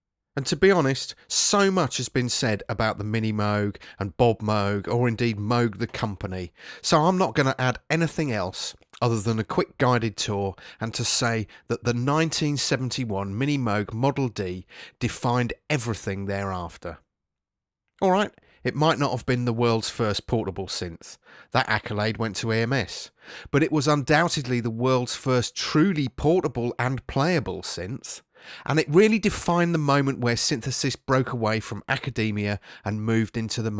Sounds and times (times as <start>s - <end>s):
Speech: 0.4s - 17.0s, 18.0s - 33.7s.